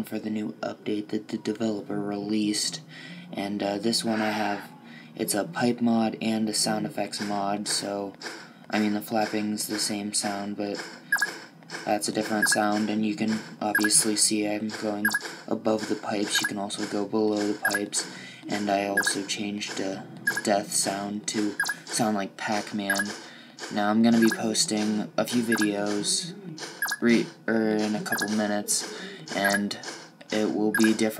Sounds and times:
Speech: 0:00.0 - 0:10.8, 0:11.8 - 0:31.1.

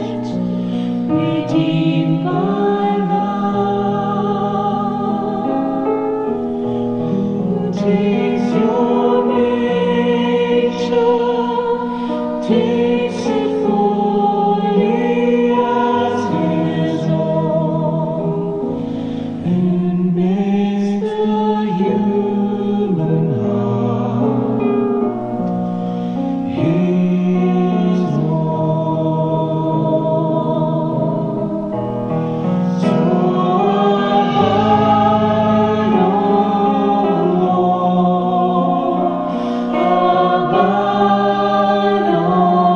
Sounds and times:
Chant: 0:00.0 - 0:42.7
Christian music: 0:00.0 - 0:42.7.

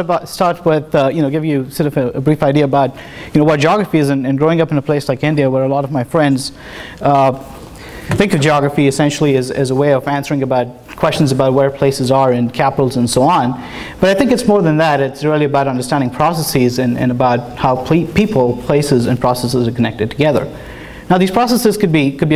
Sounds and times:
Speech: 0:00.0 - 0:07.5, 0:08.1 - 0:22.3.

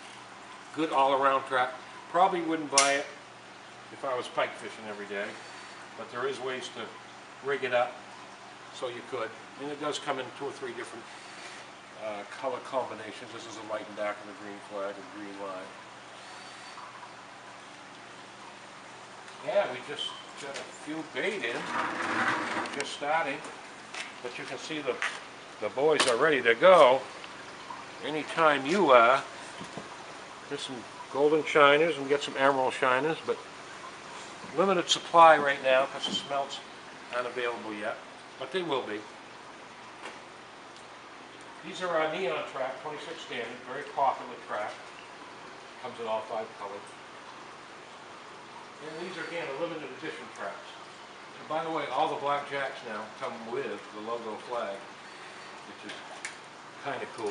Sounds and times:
Speech: 0:00.7 - 0:03.2, 0:03.9 - 0:05.4, 0:06.0 - 0:08.0, 0:08.7 - 0:11.1, 0:12.0 - 0:15.8, 0:19.4 - 0:21.7, 0:22.7 - 0:23.5, 0:24.2 - 0:27.1, 0:28.0 - 0:29.3, 0:30.5 - 0:33.4, 0:34.5 - 0:39.1, 0:41.6 - 0:44.8, 0:45.8 - 0:46.9, 0:48.8 - 0:50.8, 0:51.4 - 0:54.9, 0:55.7 - 0:56.0, 0:56.8 - 0:57.3.

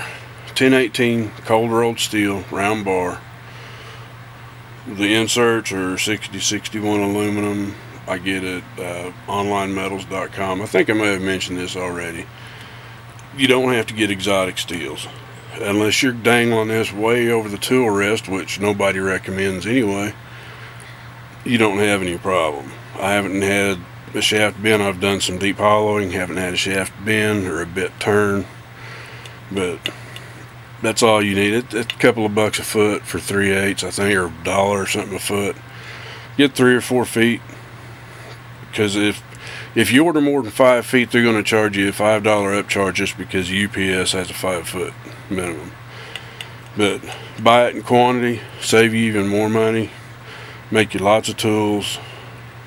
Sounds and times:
Speech: 0:00.0 - 0:03.3, 0:04.8 - 0:12.3, 0:13.3 - 0:20.2, 0:21.4 - 0:28.5, 0:29.5 - 0:30.0, 0:30.8 - 0:35.6, 0:36.4 - 0:37.6, 0:38.7 - 0:45.8, 0:46.8 - 0:50.0, 0:50.7 - 0:52.2.

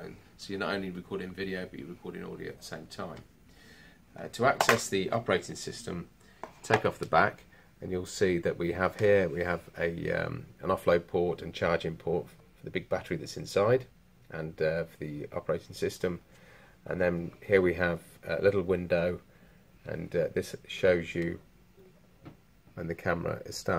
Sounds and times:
Speech: 0:00.0 - 0:03.3, 0:04.2 - 0:16.2, 0:16.8 - 0:19.2, 0:19.8 - 0:21.5, 0:22.8 - 0:23.7.

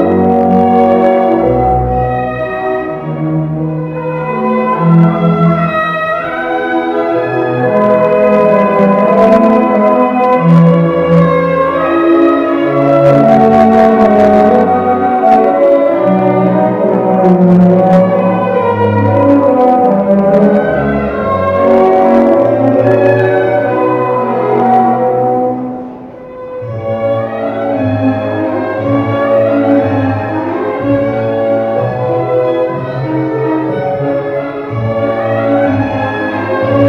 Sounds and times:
Inside, large room or hall: 0:00.0 - 0:36.8
Inside, public space: 0:00.0 - 0:36.8
Music: 0:00.0 - 0:36.8.

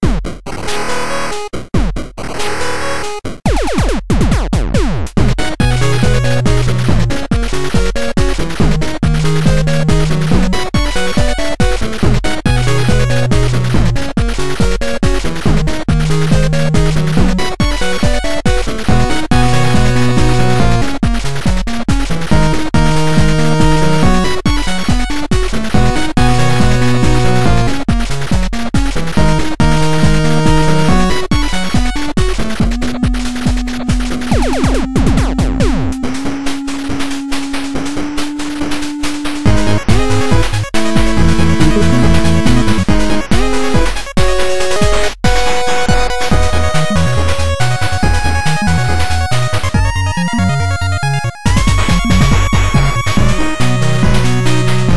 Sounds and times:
Video game music: 0:00.0 - 0:54.9.

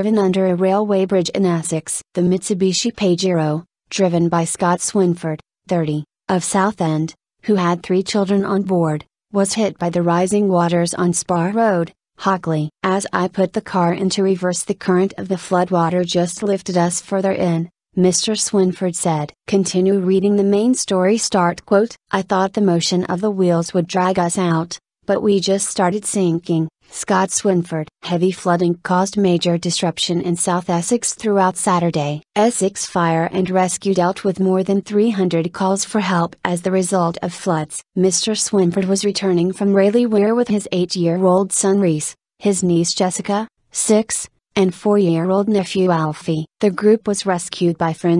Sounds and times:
Speech: 0:00.0 - 0:48.1.

